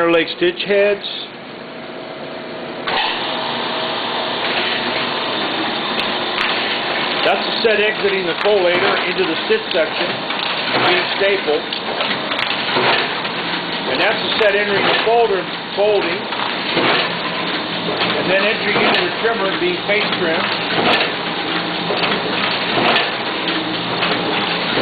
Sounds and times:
Speech: 0.0s - 1.4s, 7.2s - 10.2s, 10.8s - 11.6s, 13.9s - 16.3s, 18.2s - 20.5s.

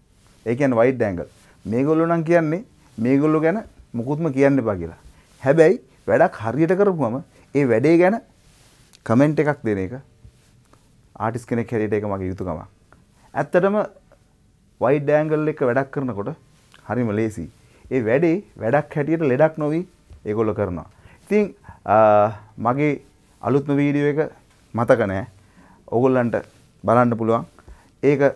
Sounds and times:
Speech: 0.4s - 8.3s, 9.0s - 10.1s, 11.2s - 12.8s, 13.4s - 14.0s, 14.8s - 28.3s.

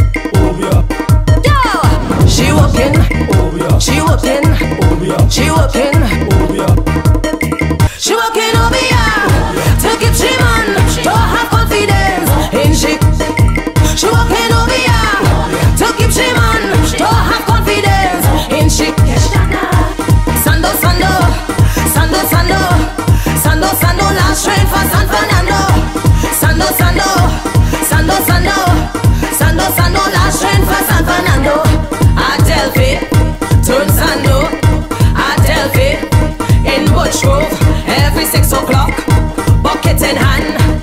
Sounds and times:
Music: 0.0s - 40.8s.

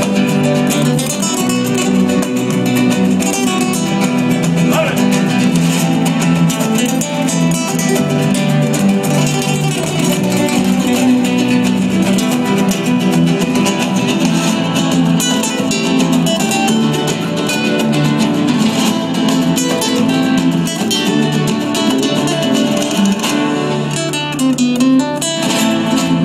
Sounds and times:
Strum: 0.0s - 26.2s.

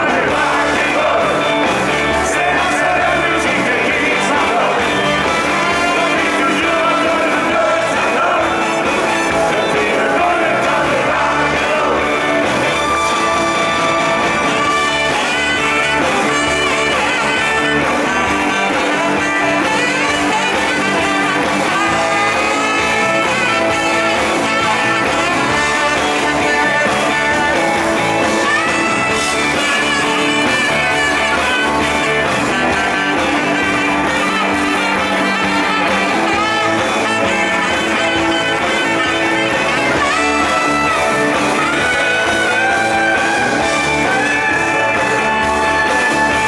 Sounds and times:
Rock and roll: 0.0s - 46.4s.

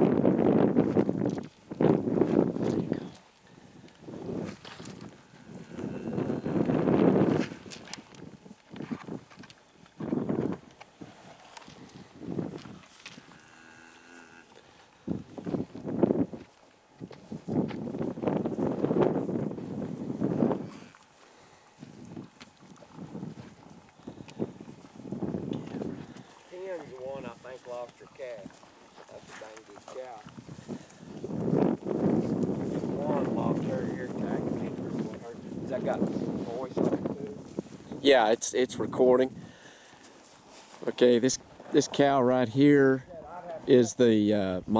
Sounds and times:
Speech: 26.5s - 30.3s, 33.0s - 37.4s, 38.0s - 39.3s, 40.8s - 44.7s.

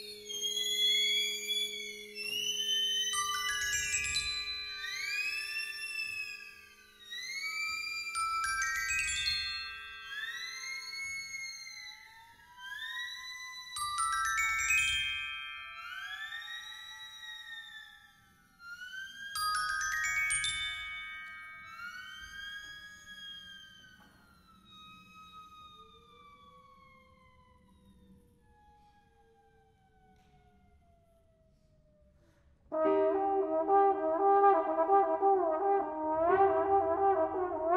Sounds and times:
Glockenspiel: 0.0s - 25.0s
Marimba, xylophone: 3.2s - 5.6s, 8.2s - 11.2s, 13.8s - 16.7s, 19.4s - 22.8s.

